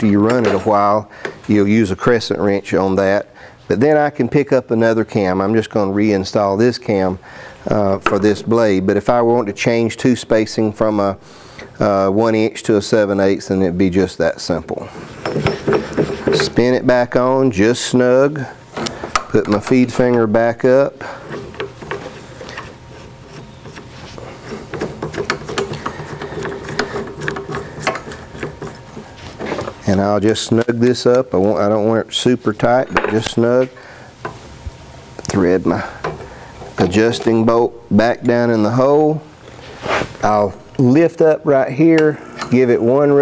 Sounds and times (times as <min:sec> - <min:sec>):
Speech: 0:00.0 - 0:11.2, 0:11.8 - 0:14.9, 0:16.4 - 0:18.6, 0:19.3 - 0:21.1, 0:29.8 - 0:33.8, 0:35.2 - 0:36.0, 0:36.8 - 0:39.3, 0:40.2 - 0:43.2
Tools: 0:15.2 - 0:16.6, 0:24.5 - 0:29.7.